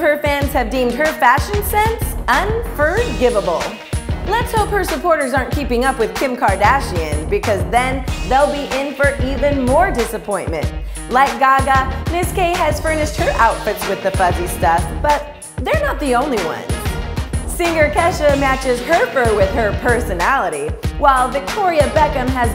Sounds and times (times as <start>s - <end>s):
Speech: 0.0s - 16.7s, 17.5s - 22.5s
Music: 0.0s - 22.5s.